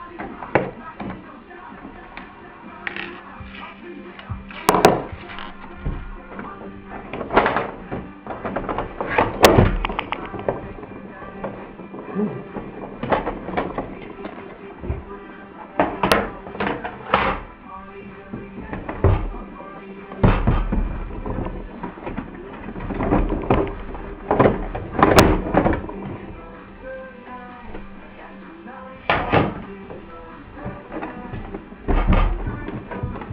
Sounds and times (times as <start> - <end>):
Music: 0.0 - 33.3.